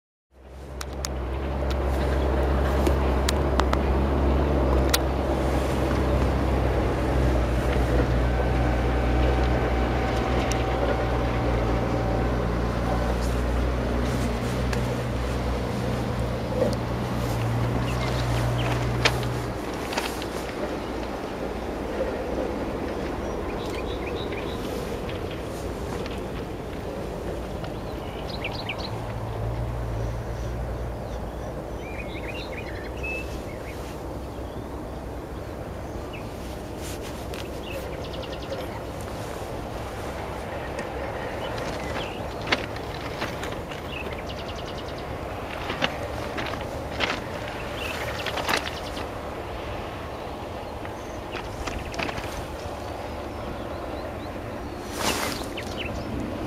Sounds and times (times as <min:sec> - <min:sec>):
Outside, rural or natural: 0:00.3 - 0:56.4
Railroad car, train wagon: 0:00.4 - 0:56.4
Train: 0:00.4 - 0:56.4.